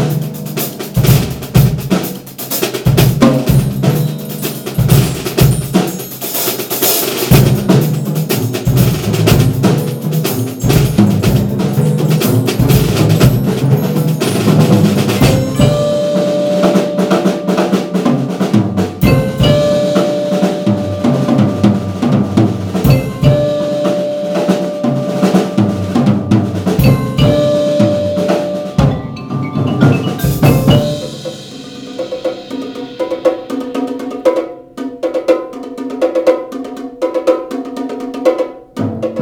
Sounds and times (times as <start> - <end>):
Drum kit: 0.0 - 39.2
Drum roll: 0.0 - 39.2
Bass drum: 2.8 - 6.0, 7.3 - 24.0, 24.6 - 32.8
Glockenspiel: 3.5 - 33.0
Marimba, xylophone: 3.8 - 33.1.